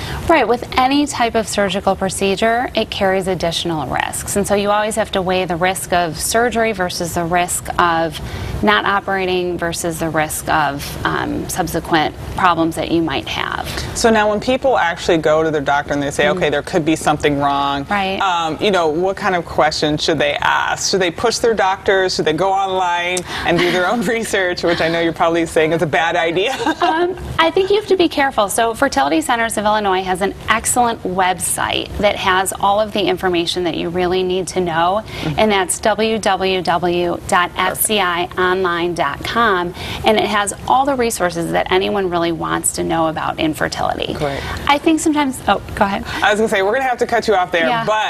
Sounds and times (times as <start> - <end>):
Female speech, woman speaking: 0.3 - 14.5, 17.9 - 18.2, 26.8 - 46.2, 47.6 - 47.9.